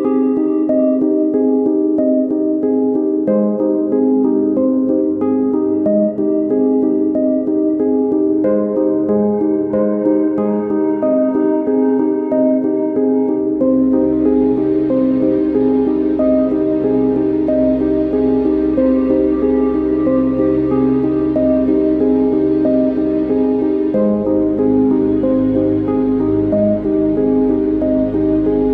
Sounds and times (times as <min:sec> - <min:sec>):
Music: 0:00.0 - 0:28.7.